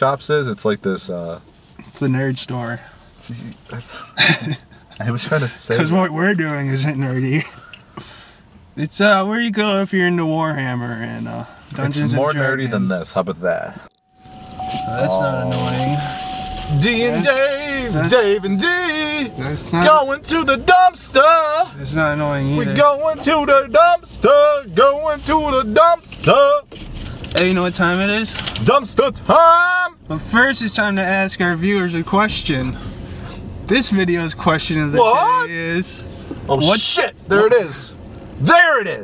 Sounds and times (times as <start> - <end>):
Speech: 8.8 - 13.8, 14.9 - 26.6, 33.7 - 39.0.